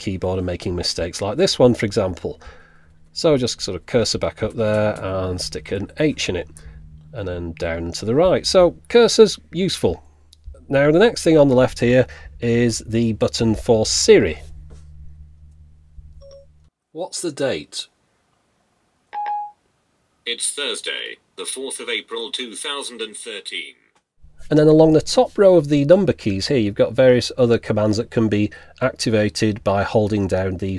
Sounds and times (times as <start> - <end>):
Speech: 0.0 - 2.4, 3.2 - 6.5, 7.2 - 10.0, 10.6 - 14.4, 17.0 - 17.9, 20.3 - 23.8, 24.5 - 30.7.